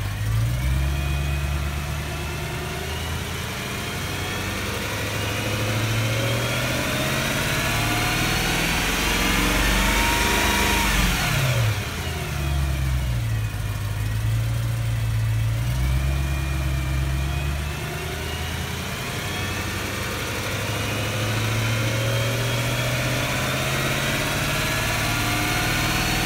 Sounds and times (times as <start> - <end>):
Accelerating, revving, vroom: 0.0 - 13.4, 14.1 - 26.2
Medium engine (mid frequency): 0.0 - 26.2.